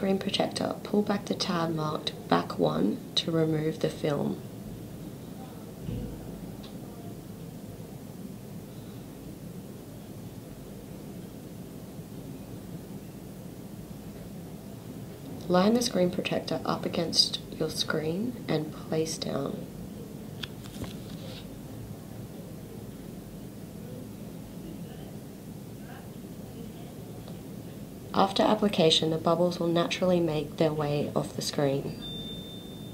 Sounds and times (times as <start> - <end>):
Speech: 0.0 - 4.4, 15.4 - 20.2, 24.0 - 27.4, 28.1 - 32.0.